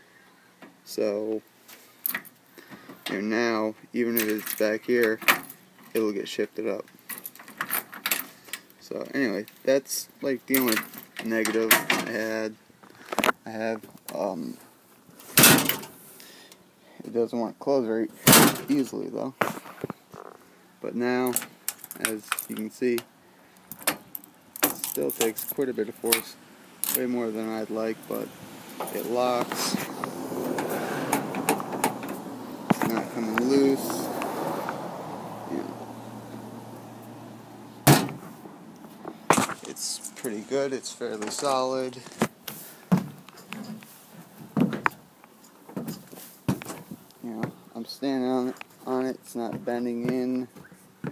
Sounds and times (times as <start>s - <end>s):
Speech: 0.9s - 1.4s, 3.1s - 5.2s, 5.9s - 6.9s, 8.8s - 12.6s, 13.4s - 14.6s, 17.0s - 19.4s, 20.8s - 21.4s, 22.0s - 23.0s, 25.0s - 26.4s, 27.0s - 28.3s, 28.9s - 29.9s, 32.8s - 34.1s, 39.6s - 42.2s, 47.2s - 50.5s.